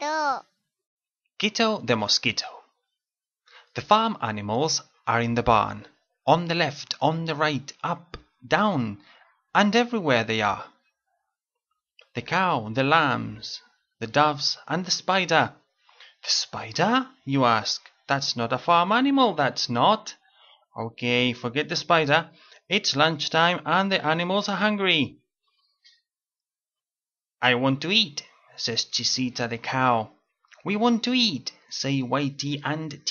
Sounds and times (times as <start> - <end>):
Speech: 0.0 - 0.4, 1.4 - 2.8, 3.7 - 10.8, 12.0 - 15.6, 16.2 - 20.2, 20.8 - 25.2, 27.4 - 33.1.